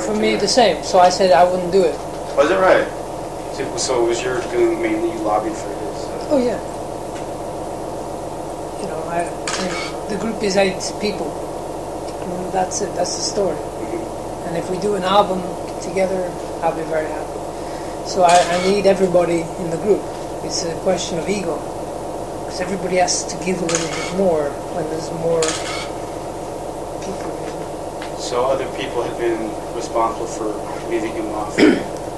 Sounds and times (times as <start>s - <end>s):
Speech: 0.0s - 3.0s, 3.6s - 6.6s, 8.8s - 11.4s, 12.1s - 17.3s, 18.0s - 21.6s, 22.5s - 25.6s, 27.0s - 27.6s, 28.2s - 31.8s.